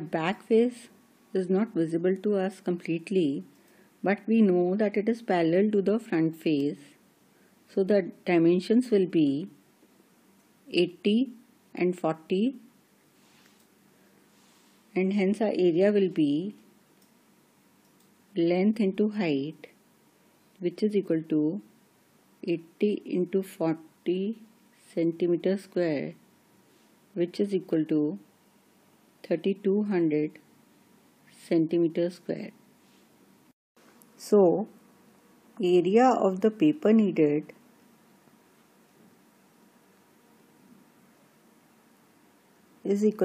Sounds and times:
Speech: 0:00.0 - 0:07.0, 0:07.7 - 0:09.6, 0:10.7 - 0:12.7, 0:15.0 - 0:16.6, 0:18.4 - 0:19.8, 0:20.6 - 0:21.7, 0:22.4 - 0:26.2, 0:27.2 - 0:28.3, 0:29.2 - 0:30.5, 0:31.4 - 0:32.6, 0:34.2 - 0:34.7, 0:35.6 - 0:37.6, 0:42.9 - 0:43.2
Inside, small room: 0:00.0 - 0:43.2.

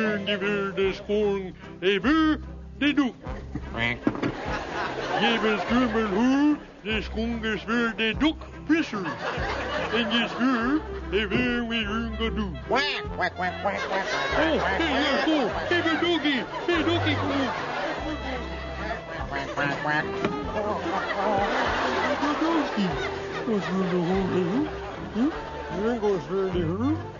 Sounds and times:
Music: 0:00.0 - 0:27.1.

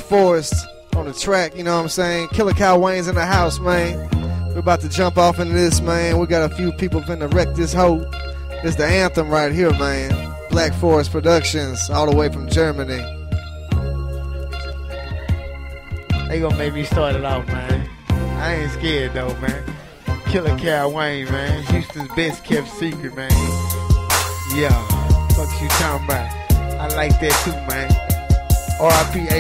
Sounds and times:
Speech: 0:00.0 - 0:04.0, 0:04.6 - 0:08.0, 0:08.6 - 0:13.1, 0:16.3 - 0:23.6, 0:24.5 - 0:28.0, 0:28.8 - 0:29.4
Music: 0:00.0 - 0:29.4.

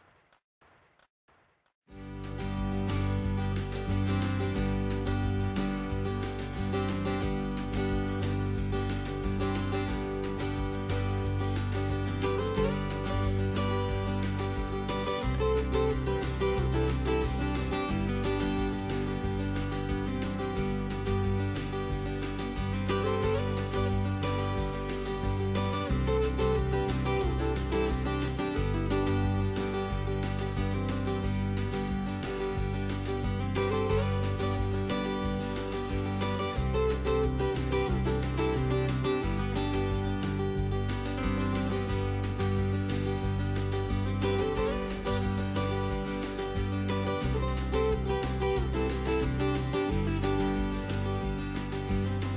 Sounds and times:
Music: 0:01.9 - 0:52.3.

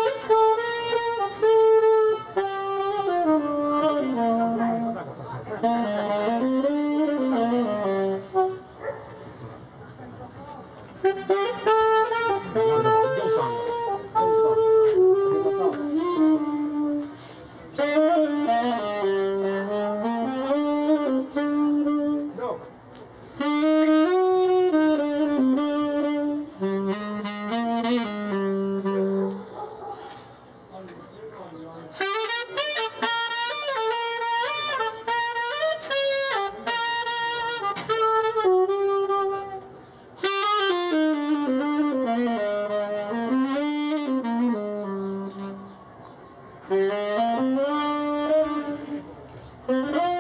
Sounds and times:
Music: 0:00.0 - 0:08.8, 0:11.0 - 0:22.5, 0:23.4 - 0:29.4, 0:32.0 - 0:45.8, 0:46.6 - 0:50.2
Speech: 0:12.4 - 0:16.0, 0:22.3 - 0:22.7, 0:30.7 - 0:32.0.

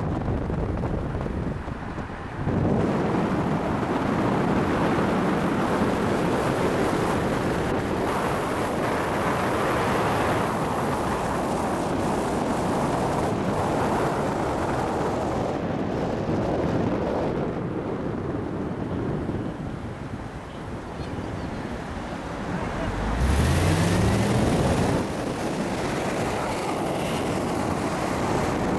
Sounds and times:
Car: 0:00.0 - 0:28.7
Outside, urban or manmade: 0:00.0 - 0:28.7.

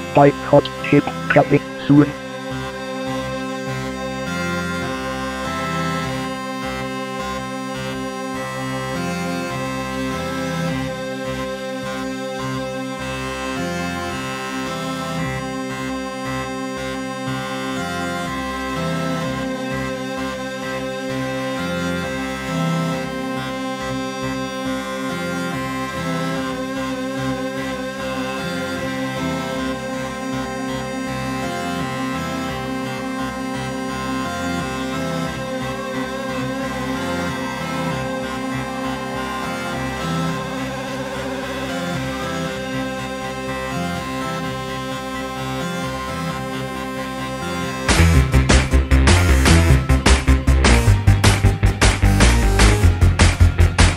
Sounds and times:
Bagpipes: 0:00.0 - 0:53.9.

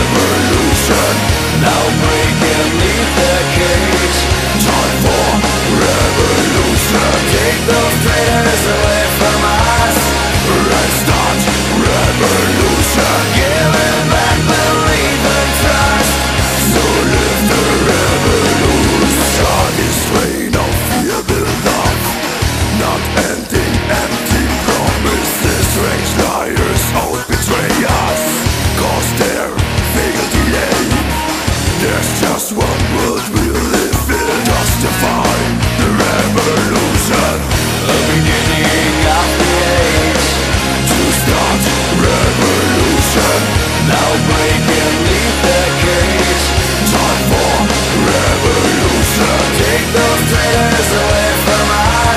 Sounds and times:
Angry music: 0:00.0 - 0:52.1.

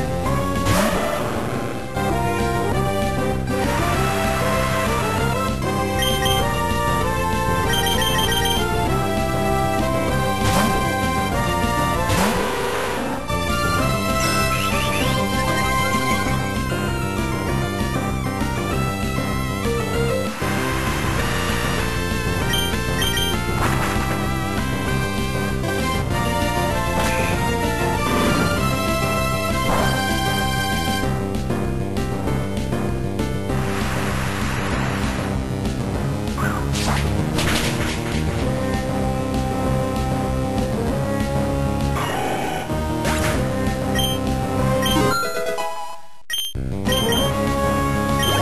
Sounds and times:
Music: 0:00.0 - 0:48.4.

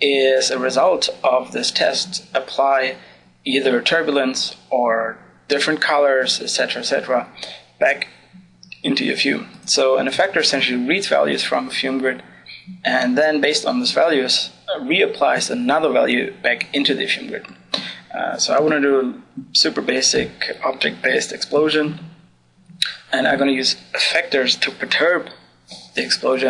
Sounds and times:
Speech: 0:00.0 - 0:22.2, 0:22.8 - 0:26.5.

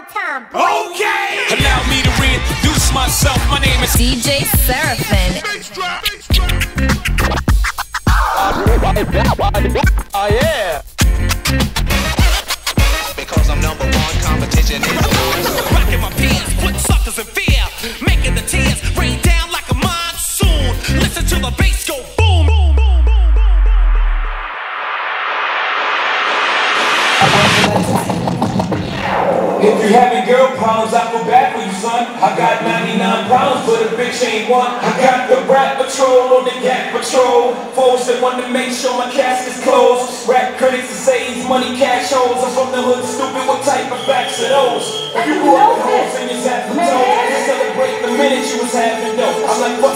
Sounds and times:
Speech: 0:08.4 - 0:10.8, 0:29.6 - 0:49.9.

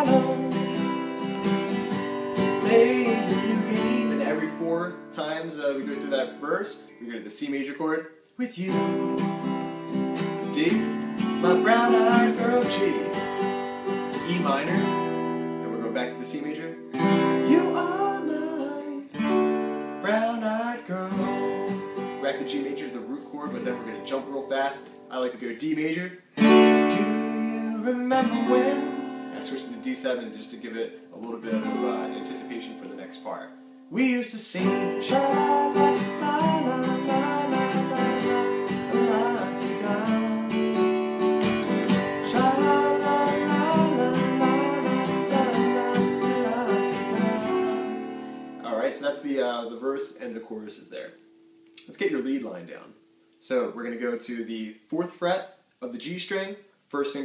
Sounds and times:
Strum: 0:00.0 - 0:05.2, 0:08.7 - 0:16.4, 0:26.3 - 0:49.0
Acoustic guitar: 0:00.0 - 0:55.1
Speech: 0:04.0 - 0:08.8, 0:10.5 - 0:10.8, 0:12.3 - 0:13.1, 0:14.2 - 0:14.9, 0:15.6 - 0:16.8, 0:22.2 - 0:26.2, 0:29.4 - 0:34.8, 0:48.6 - 0:51.2, 0:51.8 - 0:57.2.

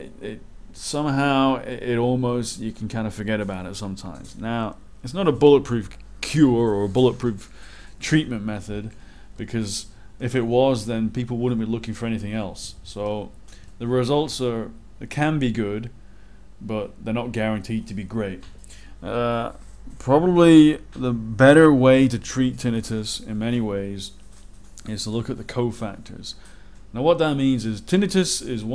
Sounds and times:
Speech: 0:00.0 - 0:15.9, 0:16.6 - 0:24.2, 0:24.8 - 0:26.4, 0:27.0 - 0:28.7.

